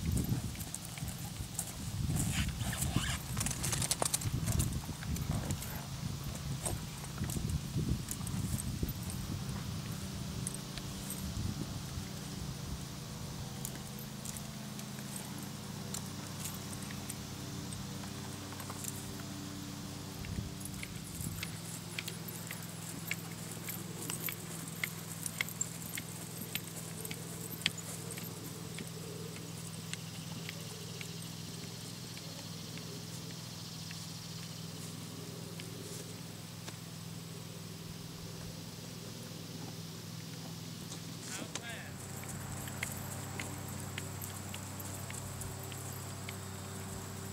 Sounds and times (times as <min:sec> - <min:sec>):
Clip-clop: 0:00.0 - 0:47.3.